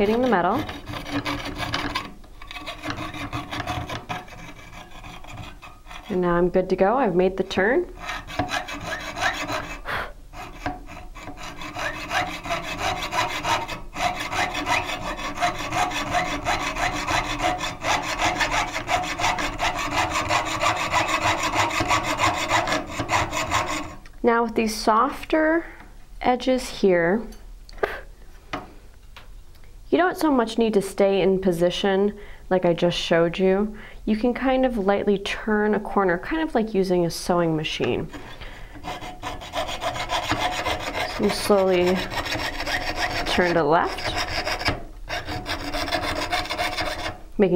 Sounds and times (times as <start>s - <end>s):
Rub: 0.0s - 6.2s, 8.0s - 24.0s, 38.0s - 47.2s
Sawing: 0.0s - 6.2s, 8.0s - 24.0s, 37.8s - 47.2s.